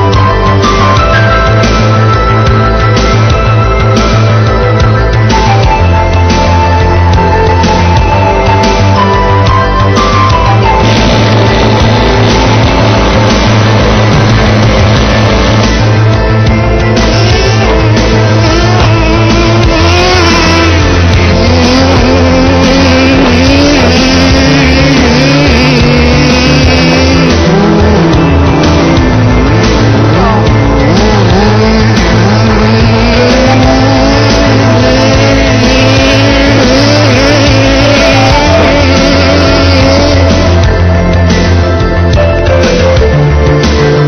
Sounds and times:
Car: 0:00.0 - 0:44.0
Music: 0:00.0 - 0:44.0.

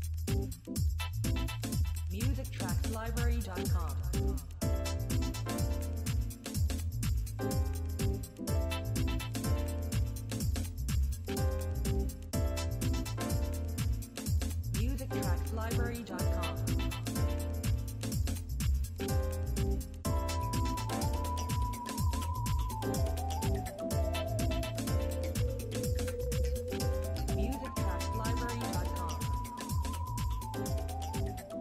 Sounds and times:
Music: 0:00.0 - 0:31.6.

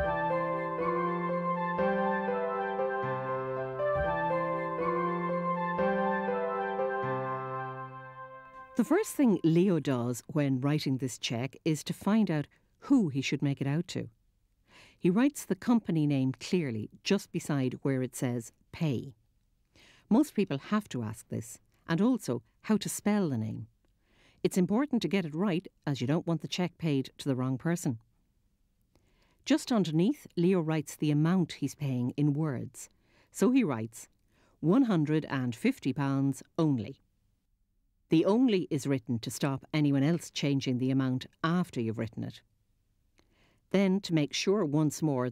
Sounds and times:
Speech: 0:08.8 - 0:14.2, 0:15.0 - 0:19.2, 0:20.1 - 0:23.7, 0:24.4 - 0:28.0, 0:29.5 - 0:37.0, 0:38.1 - 0:42.5, 0:43.7 - 0:45.3.

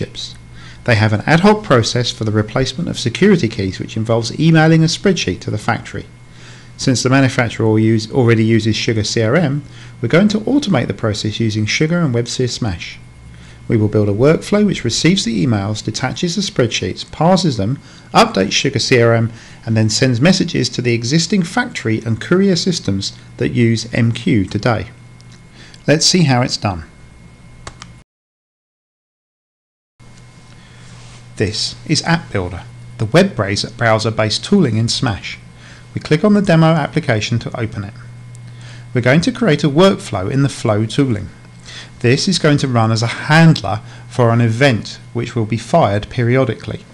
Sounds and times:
Speech: 0:00.0 - 0:06.1, 0:06.8 - 0:13.0, 0:13.7 - 0:25.0, 0:25.8 - 0:26.9, 0:31.4 - 0:35.4, 0:36.0 - 0:38.1, 0:39.0 - 0:41.4, 0:42.0 - 0:46.9.

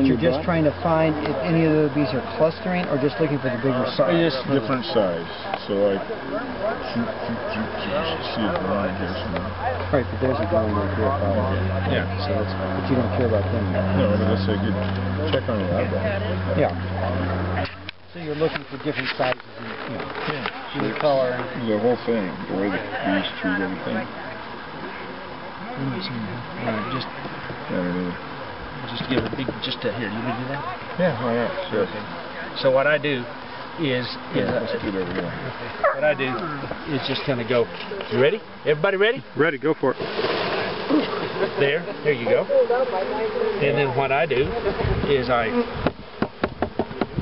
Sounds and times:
Bee, wasp, etc.: 0:00.0 - 0:47.2
Outside, rural or natural: 0:00.0 - 0:47.2.

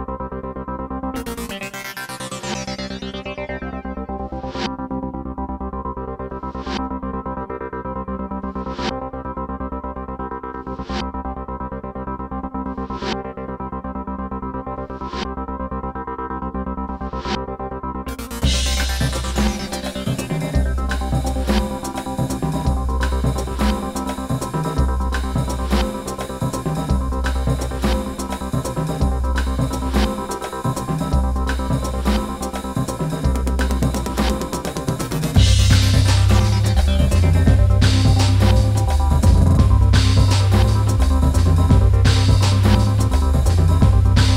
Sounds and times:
Music: 0:00.0 - 0:44.3.

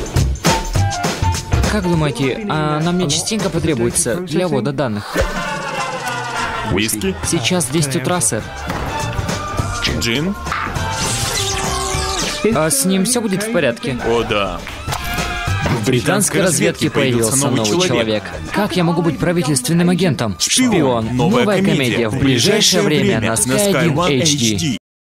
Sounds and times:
Music: 0:00.0 - 0:24.8
Speech: 0:01.6 - 0:05.1, 0:06.7 - 0:08.4, 0:12.4 - 0:14.6, 0:15.8 - 0:24.8.

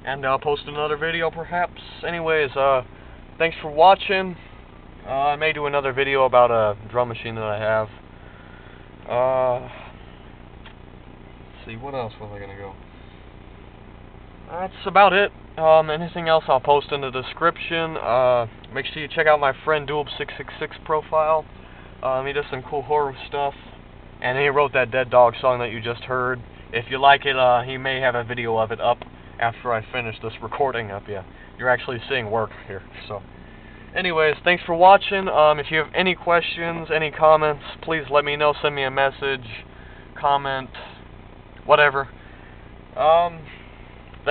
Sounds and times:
Speech: 0:00.0 - 0:08.0, 0:09.1 - 0:09.9, 0:11.5 - 0:12.8, 0:14.5 - 0:33.2, 0:33.9 - 0:41.0, 0:41.7 - 0:42.1, 0:43.0 - 0:43.6.

